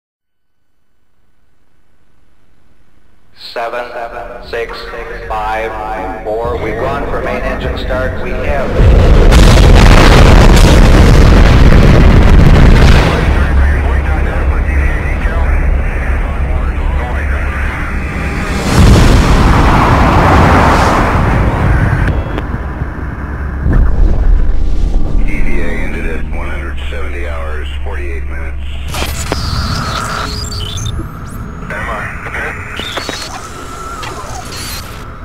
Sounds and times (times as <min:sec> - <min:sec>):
Speech: 0:03.4 - 0:08.8, 0:13.1 - 0:18.2, 0:25.3 - 0:28.9, 0:31.7 - 0:32.7
Boom: 0:08.4 - 0:16.6, 0:17.2 - 0:27.6.